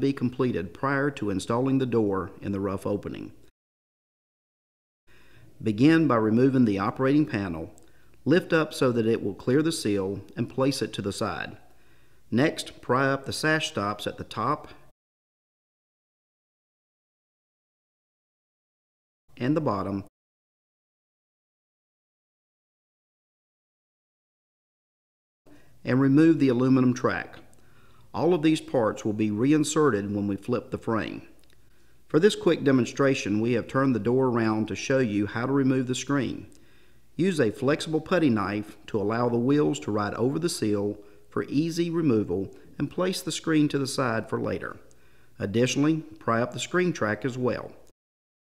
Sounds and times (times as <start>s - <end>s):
Speech: 0.0s - 3.4s, 5.6s - 11.7s, 12.3s - 14.9s, 19.3s - 20.1s, 25.8s - 27.5s, 28.1s - 31.4s, 32.1s - 36.6s, 37.2s - 47.9s.